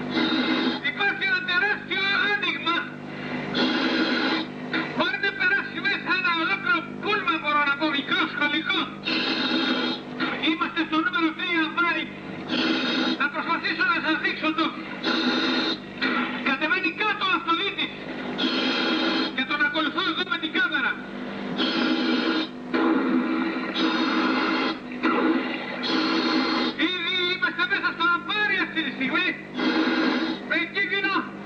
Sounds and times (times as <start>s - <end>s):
Speech: 0.8s - 3.0s, 5.0s - 9.0s, 10.3s - 12.1s, 13.2s - 14.8s, 16.5s - 18.0s, 19.4s - 21.0s, 26.8s - 29.4s, 30.5s - 31.4s.